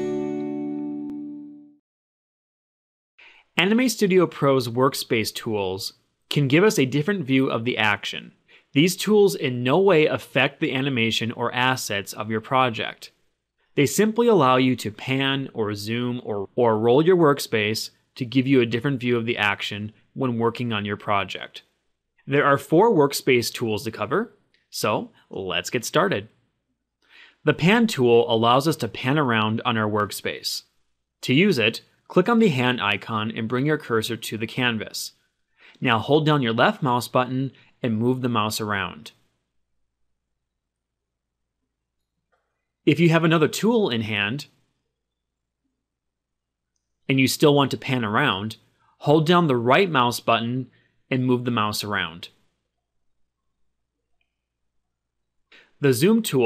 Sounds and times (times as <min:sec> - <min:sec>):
Speech: 0:03.5 - 0:13.2, 0:13.8 - 0:26.4, 0:27.4 - 0:35.2, 0:35.8 - 0:39.2, 0:42.9 - 0:44.6, 0:47.1 - 0:52.4, 0:55.8 - 0:56.4.